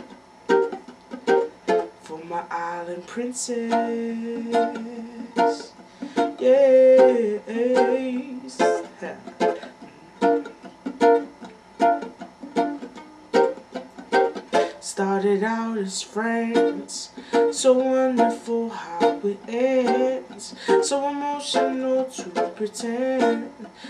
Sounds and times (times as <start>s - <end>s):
Ukulele: 0.0s - 23.8s
Singing: 2.0s - 9.7s, 14.7s - 23.8s.